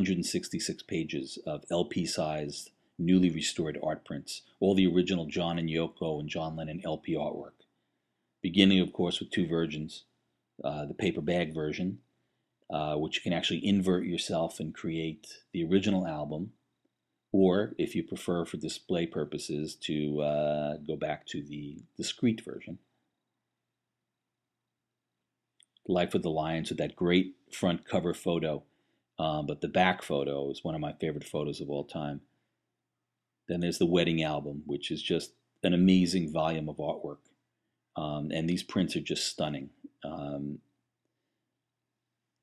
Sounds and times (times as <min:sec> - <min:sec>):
Speech: 0:00.0 - 0:07.6, 0:08.4 - 0:12.0, 0:12.7 - 0:16.6, 0:17.4 - 0:22.8, 0:25.9 - 0:32.3, 0:33.5 - 0:37.2, 0:38.0 - 0:40.6.